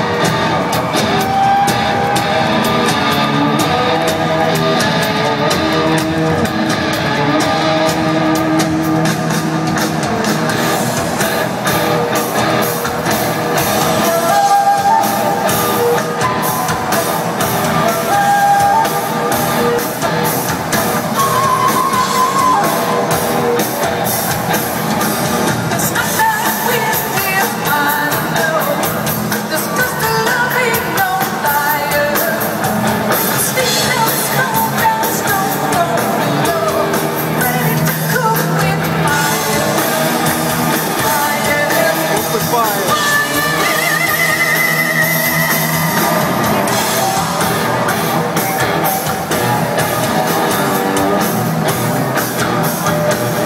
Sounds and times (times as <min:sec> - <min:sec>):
Inside, large room or hall: 0:00.0 - 0:53.4
Music: 0:00.0 - 0:53.4
Singing: 0:13.8 - 0:20.4, 0:25.8 - 0:49.5.